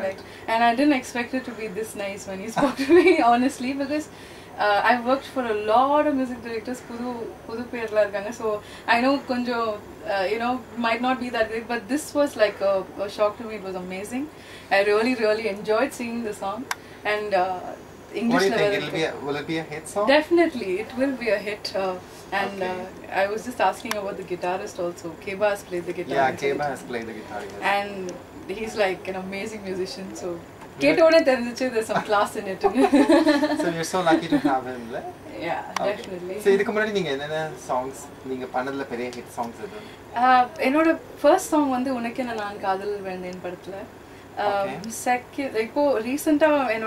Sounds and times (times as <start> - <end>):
Speech: 17.2 - 24.4, 25.9 - 32.1, 44.4 - 46.8.